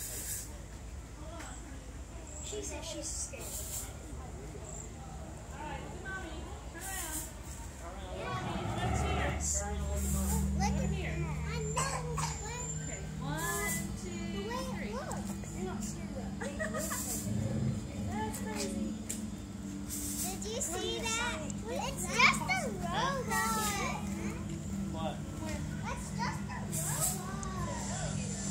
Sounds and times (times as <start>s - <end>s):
Speech: 1.2s - 17.3s.